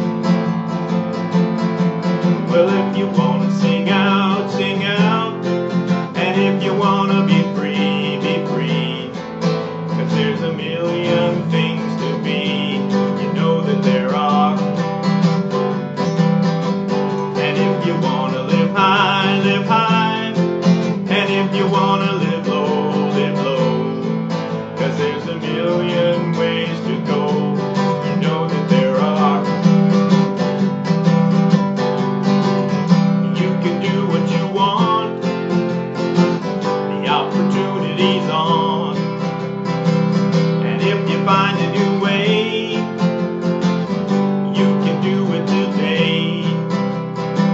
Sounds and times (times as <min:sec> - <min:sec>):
Music: 0:00.0 - 0:47.5.